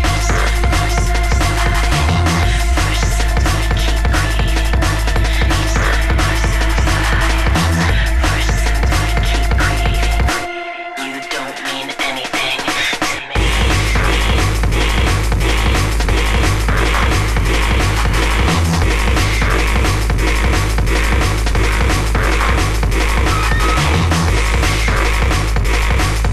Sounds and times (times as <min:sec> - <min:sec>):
Drum and bass: 0:00.0 - 0:26.3.